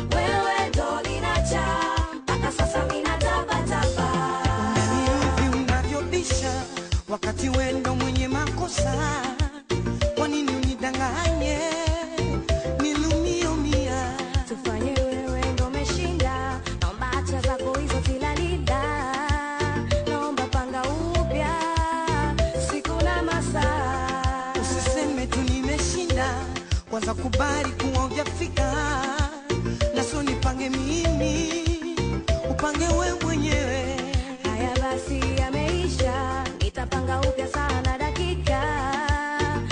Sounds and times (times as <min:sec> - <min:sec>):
Music of Africa: 0:00.0 - 0:39.7
Soul music: 0:00.0 - 0:39.7.